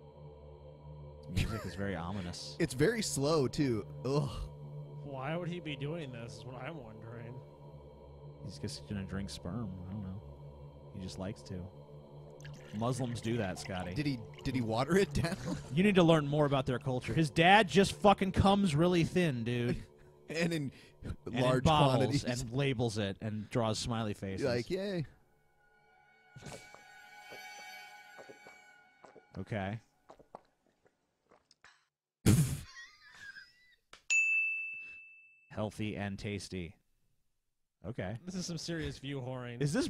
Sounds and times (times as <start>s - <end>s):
Ding: 34.1s - 35.5s.